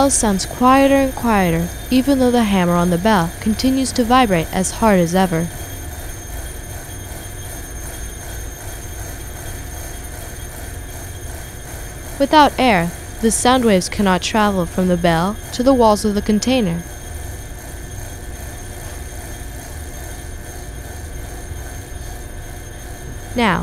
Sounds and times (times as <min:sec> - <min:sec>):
Speech: 0:00.0 - 0:05.5, 0:12.2 - 0:16.8, 0:23.4 - 0:23.6.